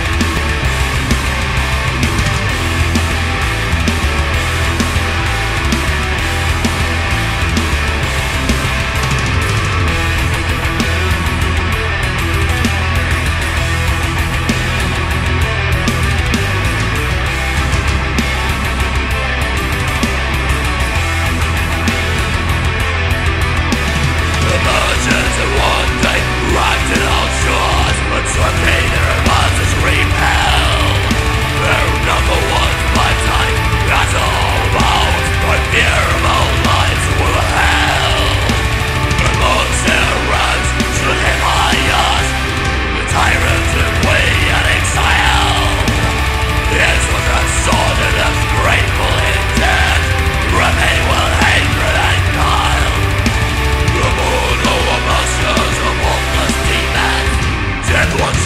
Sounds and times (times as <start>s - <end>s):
Music: 0.0s - 58.4s.